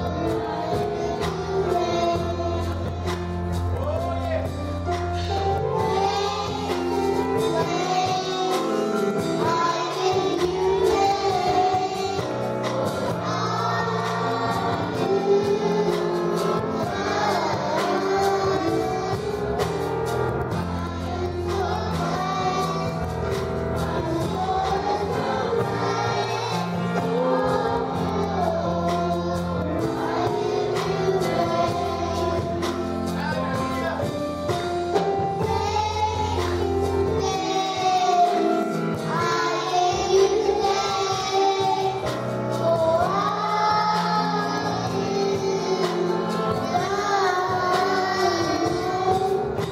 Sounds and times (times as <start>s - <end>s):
Child singing: 0.0s - 3.4s, 5.2s - 19.9s, 20.6s - 23.2s, 23.8s - 33.4s, 34.9s - 49.7s
Choir: 0.0s - 3.5s, 5.2s - 33.4s, 34.9s - 49.7s.